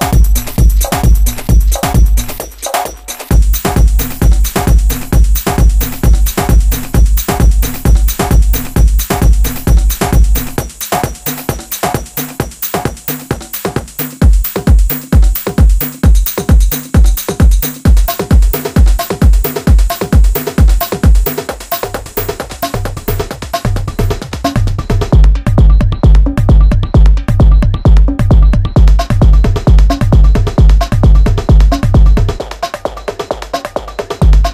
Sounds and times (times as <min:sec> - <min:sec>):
Drum kit: 0:00.0 - 0:34.5
Techno: 0:00.0 - 0:34.5.